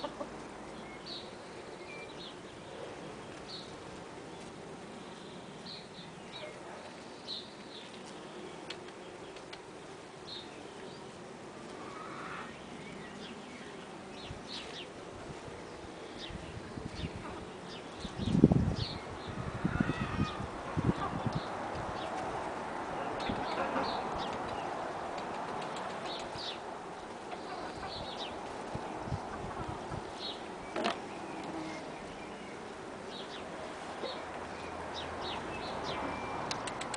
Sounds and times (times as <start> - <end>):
Cluck: 0.0 - 0.3, 23.5 - 24.0.